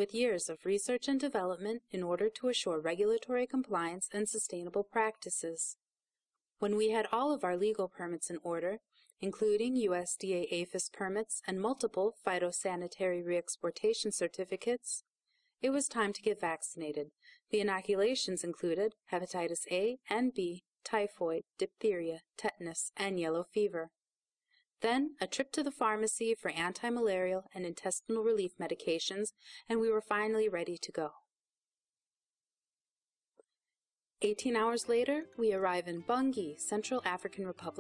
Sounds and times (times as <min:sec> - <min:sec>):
Speech: 0:00.0 - 0:05.8, 0:06.6 - 0:15.0, 0:15.6 - 0:24.0, 0:24.8 - 0:31.2, 0:34.2 - 0:37.8.